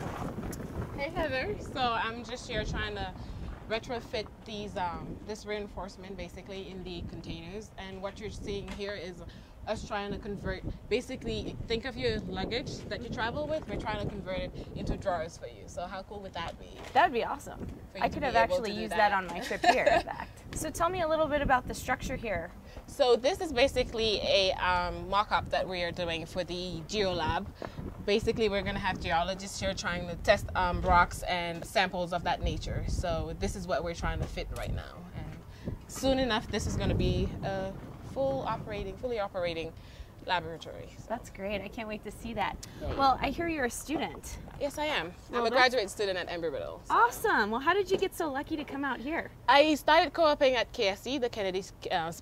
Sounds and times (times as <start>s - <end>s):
Speech: 1.0s - 3.1s, 3.7s - 27.5s, 40.3s - 52.2s.